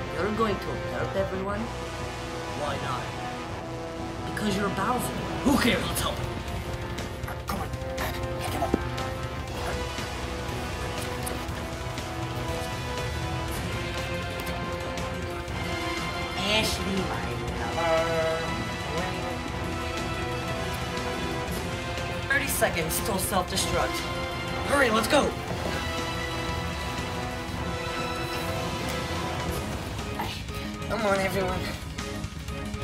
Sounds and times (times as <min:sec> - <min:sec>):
Music: 0:00.0 - 0:32.8.